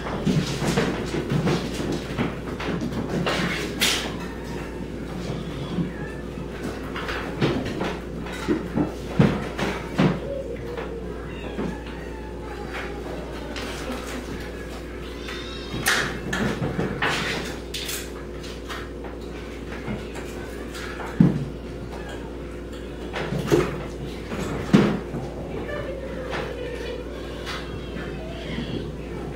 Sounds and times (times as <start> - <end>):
Meow: 4.1 - 6.4, 10.9 - 13.4, 15.0 - 16.2, 27.0 - 29.3
Caterwaul: 10.4 - 13.6, 15.0 - 16.0, 26.7 - 29.3.